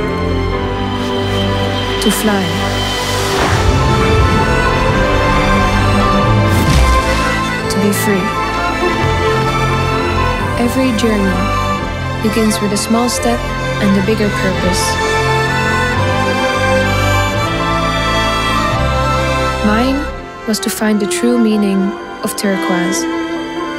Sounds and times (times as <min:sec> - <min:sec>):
Music: 0:00.0 - 0:23.7
Speech: 0:02.0 - 0:02.6, 0:07.7 - 0:08.4, 0:10.5 - 0:11.5, 0:12.2 - 0:15.0, 0:19.6 - 0:23.1.